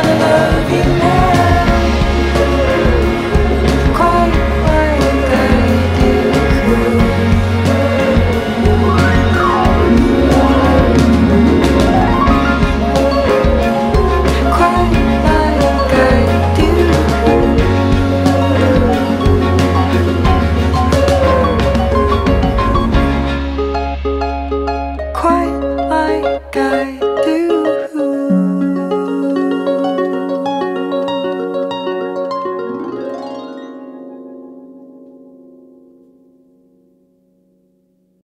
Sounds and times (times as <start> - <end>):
Music: 0.0 - 38.2.